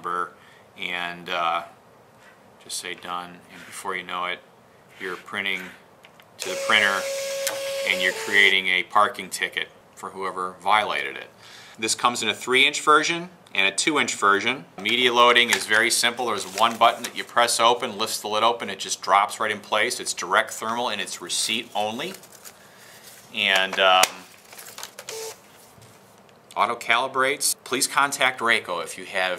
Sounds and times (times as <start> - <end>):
Speech: 0.0 - 1.8, 2.6 - 5.8, 6.4 - 7.1, 7.9 - 22.2, 23.3 - 24.3, 26.6 - 29.3
Printer: 6.4 - 8.5, 25.0 - 25.4.